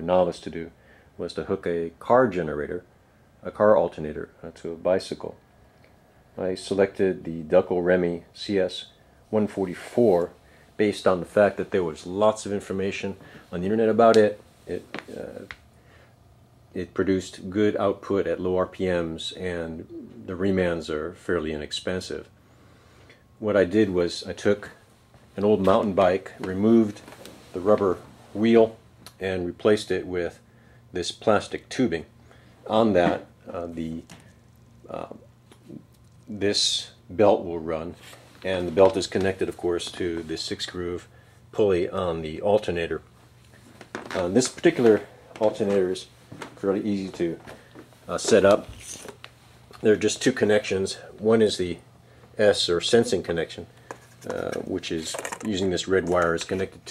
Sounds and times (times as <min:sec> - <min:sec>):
Speech: 0:00.0 - 0:05.4, 0:06.4 - 0:15.6, 0:16.7 - 0:22.3, 0:23.4 - 0:24.8, 0:25.4 - 0:34.1, 0:34.8 - 0:43.1, 0:44.1 - 0:47.5, 0:48.1 - 0:49.1, 0:49.8 - 0:51.8, 0:52.4 - 0:56.9.